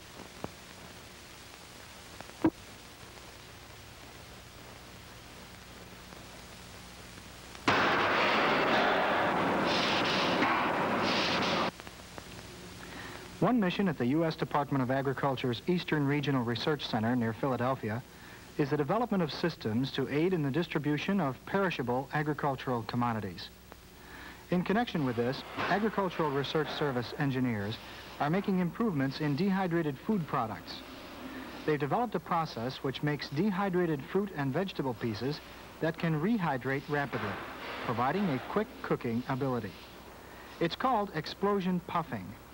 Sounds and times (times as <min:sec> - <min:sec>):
Speech: 0:13.4 - 0:23.6, 0:24.5 - 0:30.8, 0:31.6 - 0:39.9, 0:40.6 - 0:42.4.